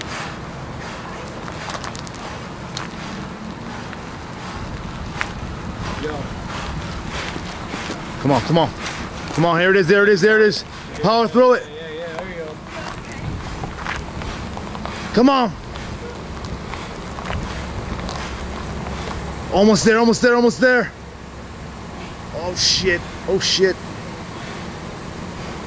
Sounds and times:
Speech: 0:09.4 - 0:13.3, 0:15.1 - 0:15.6, 0:19.5 - 0:21.0, 0:22.3 - 0:23.8.

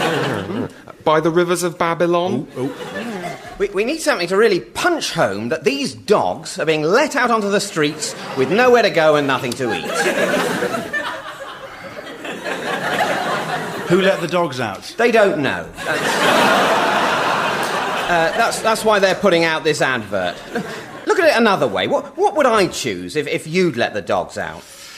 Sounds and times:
Speech: 0:01.0 - 0:10.1, 0:13.8 - 0:16.2, 0:18.0 - 0:20.4, 0:21.0 - 0:24.6.

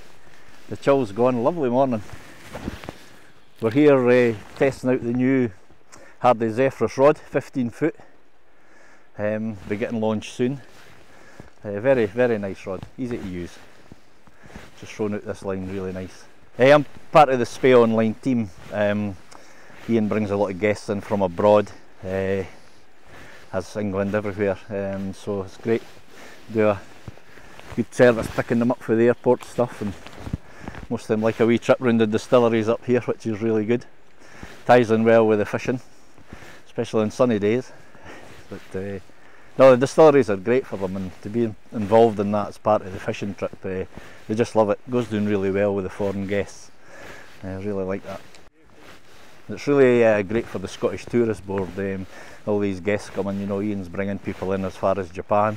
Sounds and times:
Speech: 0:00.7 - 0:02.1, 0:03.6 - 0:05.6, 0:06.2 - 0:08.1, 0:09.2 - 0:10.7, 0:11.6 - 0:13.6, 0:14.8 - 0:19.2, 0:19.9 - 0:22.6, 0:23.5 - 0:25.9, 0:26.5 - 0:26.8, 0:27.8 - 0:30.0, 0:30.9 - 0:33.9, 0:34.6 - 0:35.9, 0:36.7 - 0:37.8, 0:38.5 - 0:39.0, 0:39.6 - 0:46.7, 0:47.4 - 0:48.2, 0:49.5 - 0:55.5.

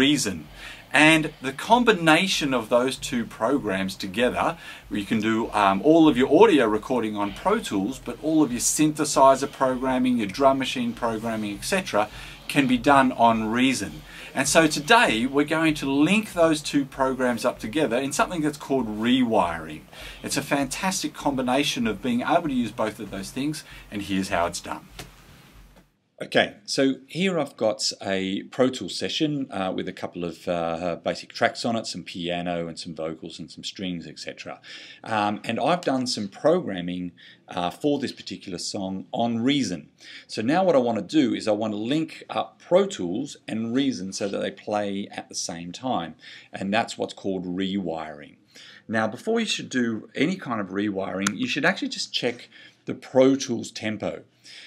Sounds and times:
Speech: 0:00.0 - 0:24.9, 0:26.2 - 0:54.6.

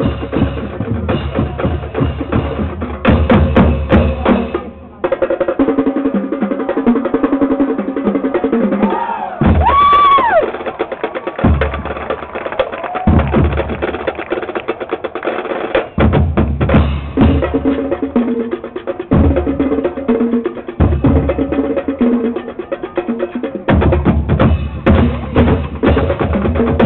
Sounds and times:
Music: 0:00.0 - 0:26.8
Speech: 0:04.0 - 0:06.0.

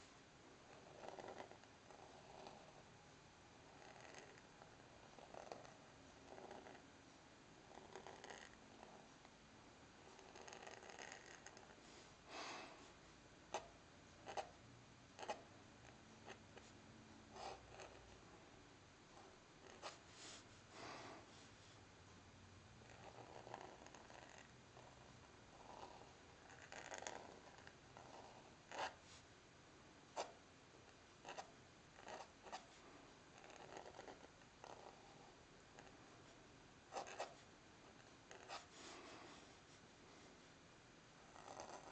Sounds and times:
Writing: 0:00.6 - 0:02.9, 0:03.6 - 0:06.9, 0:07.6 - 0:09.4, 0:10.0 - 0:11.8, 0:13.5 - 0:14.6, 0:15.2 - 0:18.2, 0:19.1 - 0:20.6, 0:22.8 - 0:29.2, 0:30.1 - 0:39.8, 0:41.2 - 0:41.9.

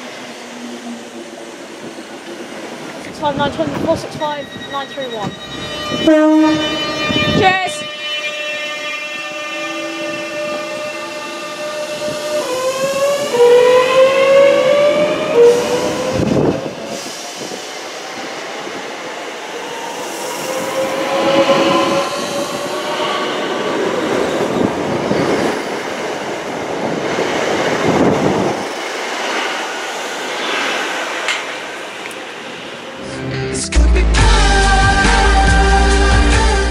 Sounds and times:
Railroad car, train wagon: 0:00.0 - 0:36.7
Subway, metro, underground: 0:00.0 - 0:36.7
Train horn: 0:05.5 - 0:16.2, 0:20.4 - 0:23.9.

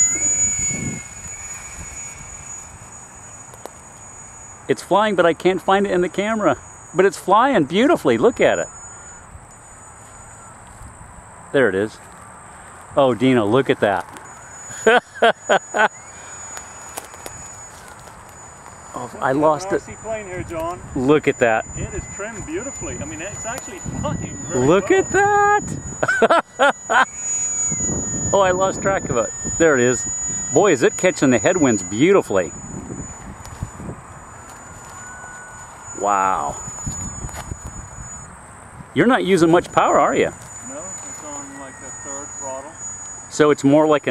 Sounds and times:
Speech: 0:04.7 - 0:08.7, 0:13.0 - 0:14.0, 0:19.0 - 0:25.6, 0:30.6 - 0:32.5, 0:39.0 - 0:44.1.

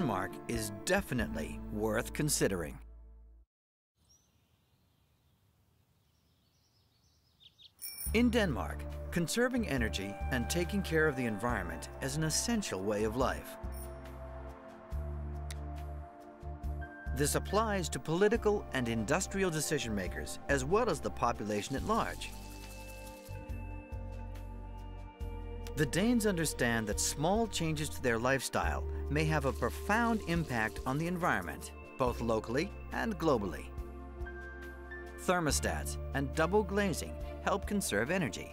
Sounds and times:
Speech: 0:00.0 - 0:02.8, 0:08.1 - 0:13.5, 0:17.1 - 0:22.3, 0:25.8 - 0:33.7, 0:35.2 - 0:38.5
Music: 0:00.0 - 0:03.4, 0:08.1 - 0:38.5.

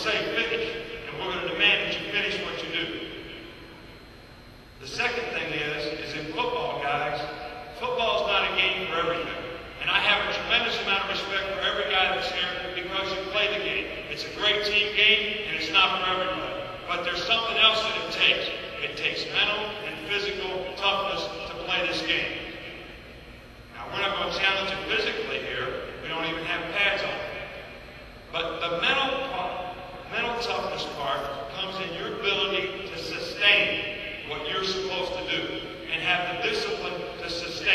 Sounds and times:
Male speech, man speaking: 0:00.0 - 0:03.2, 0:04.8 - 0:22.4, 0:23.8 - 0:27.4, 0:28.3 - 0:37.7
Narration, monologue: 0:00.0 - 0:37.7.

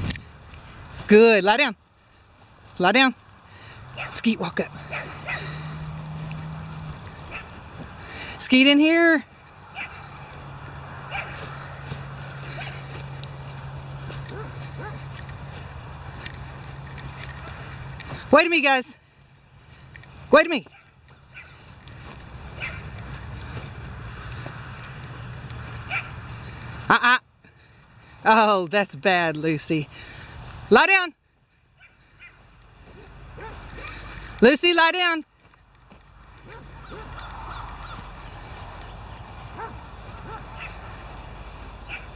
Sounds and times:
Speech: 0:01.1 - 0:01.8, 0:02.8 - 0:03.2, 0:28.2 - 0:29.9, 0:34.4 - 0:35.2
Dog: 0:04.8 - 0:05.6, 0:09.7 - 0:10.1, 0:11.1 - 0:11.5, 0:12.5 - 0:12.9, 0:14.3 - 0:15.0, 0:22.5 - 0:22.9, 0:31.8 - 0:34.0, 0:36.4 - 0:37.7, 0:39.6 - 0:40.8, 0:41.9 - 0:42.1.

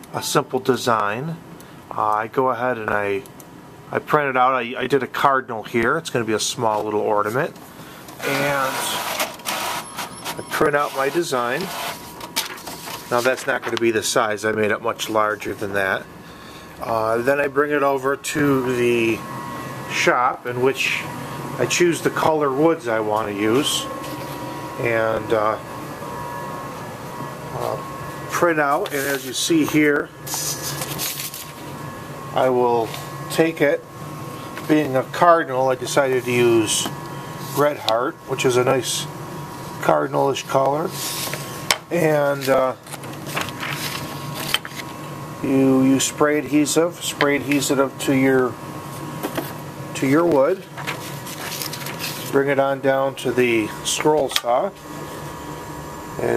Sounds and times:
Speech: 0:00.1 - 0:03.3, 0:03.9 - 0:07.6, 0:08.2 - 0:09.1, 0:10.4 - 0:11.7, 0:13.1 - 0:16.1, 0:16.8 - 0:19.3, 0:19.9 - 0:23.9, 0:24.8 - 0:25.6, 0:27.6 - 0:30.1, 0:32.4 - 0:33.9, 0:34.7 - 0:39.1, 0:39.8 - 0:41.0, 0:41.9 - 0:42.8, 0:45.4 - 0:48.6, 0:50.0 - 0:50.7, 0:52.3 - 0:54.8, 0:56.2 - 0:56.3.

